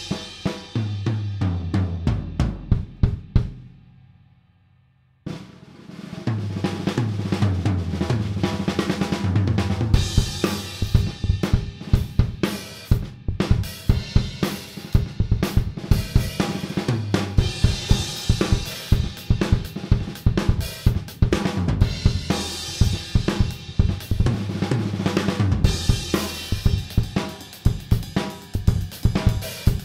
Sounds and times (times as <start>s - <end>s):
Drum: 0.0s - 3.8s, 5.3s - 29.8s
Drum kit: 0.0s - 3.8s, 5.3s - 29.8s.